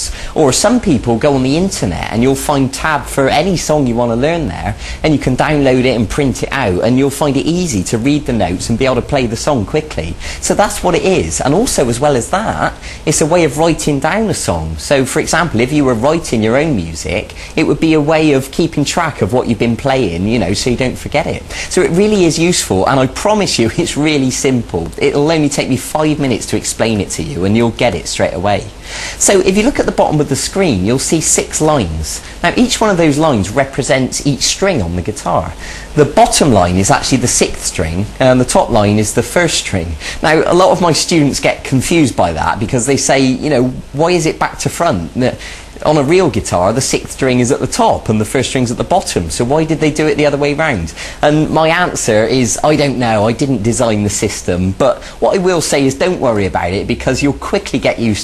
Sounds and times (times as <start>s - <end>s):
Speech: 0.0s - 58.2s.